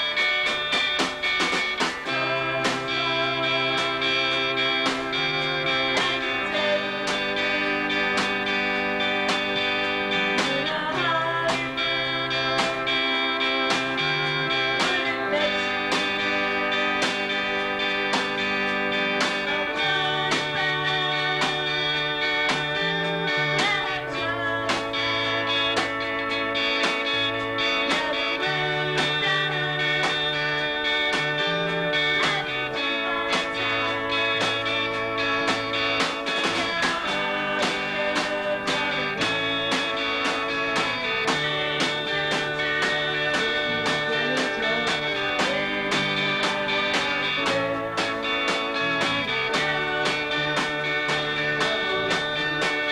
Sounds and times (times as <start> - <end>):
Drum: 0.0 - 13.0, 13.7 - 25.0, 35.4 - 52.9
Drum kit: 0.0 - 52.9
Guitar: 0.0 - 52.9
Singing: 2.1 - 8.4, 10.1 - 17.2, 19.4 - 25.9, 27.8 - 34.9, 36.4 - 52.9.